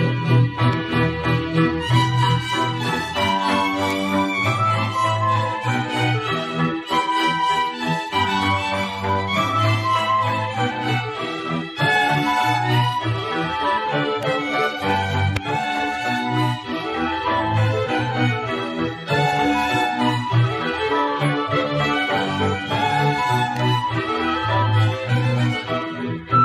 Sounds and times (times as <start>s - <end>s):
Music: 0.0s - 26.4s.